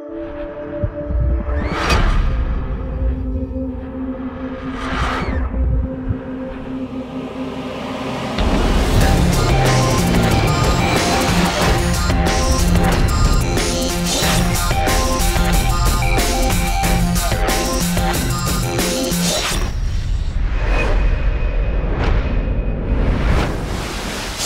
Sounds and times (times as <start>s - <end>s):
Music: 0.0s - 23.7s.